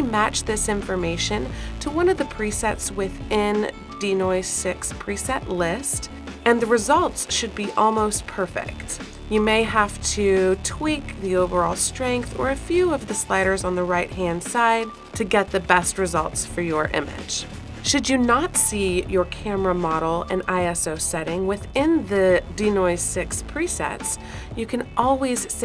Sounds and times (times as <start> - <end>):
Music: 0.0 - 25.6
Speech: 0.0 - 25.6.